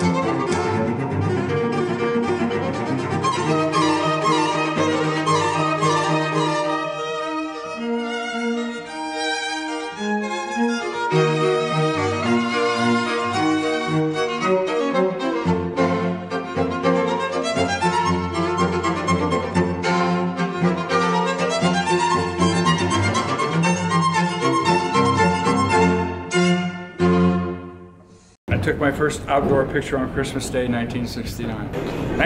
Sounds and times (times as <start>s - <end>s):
Bowed string instrument: 0.0s - 28.4s.